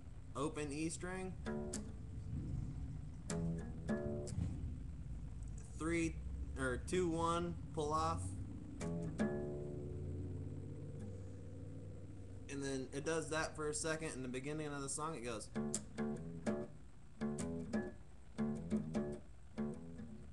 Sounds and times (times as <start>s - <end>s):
Acoustic guitar: 0.0s - 20.3s
Strum: 0.0s - 20.3s
Speech: 0.4s - 1.4s, 5.6s - 8.3s, 12.5s - 15.6s.